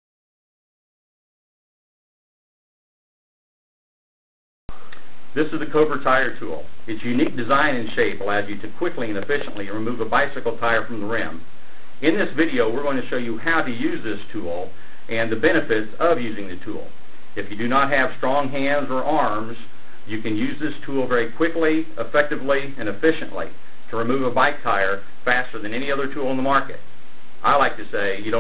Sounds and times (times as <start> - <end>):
Speech: 5.4 - 11.4, 12.0 - 26.8, 27.4 - 28.4.